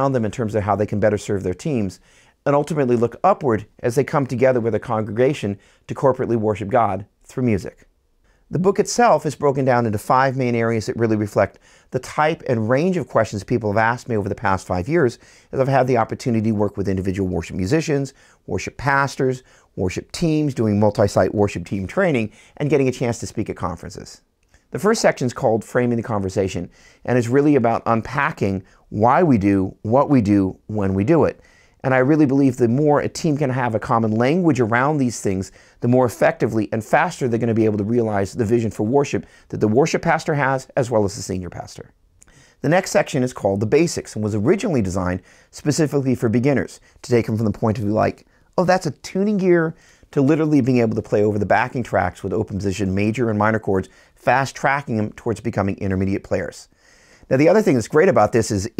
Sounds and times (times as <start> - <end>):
Speech: 0.0 - 7.9, 8.5 - 42.0, 42.6 - 56.7, 57.3 - 58.7.